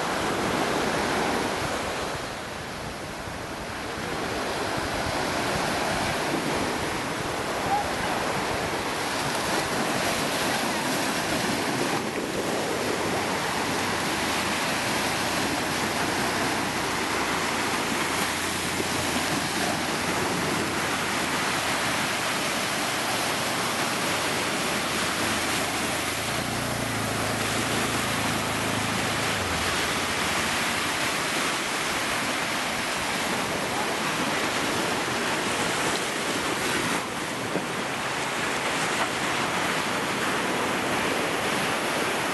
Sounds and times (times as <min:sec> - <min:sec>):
Waves, surf: 0:00.0 - 0:42.3.